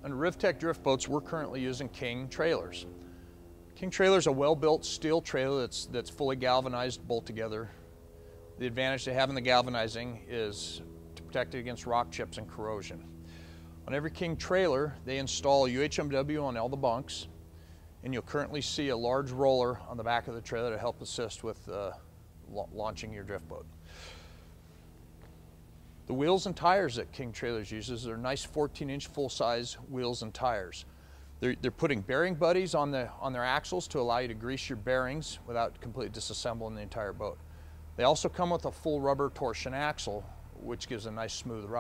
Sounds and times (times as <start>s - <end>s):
Speech: 0.0s - 2.9s, 3.8s - 7.8s, 8.6s - 13.1s, 13.8s - 17.3s, 18.0s - 23.7s, 26.1s - 37.4s, 38.0s - 41.8s.